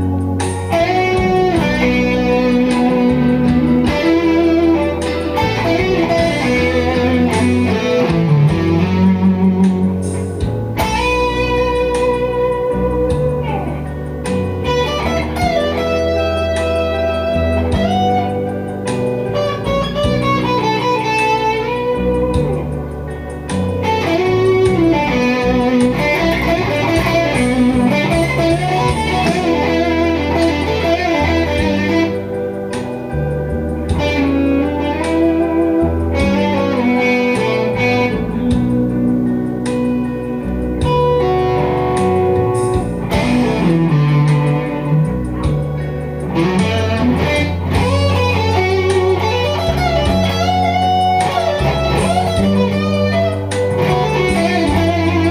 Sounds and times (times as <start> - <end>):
Strum: 0.0 - 55.3.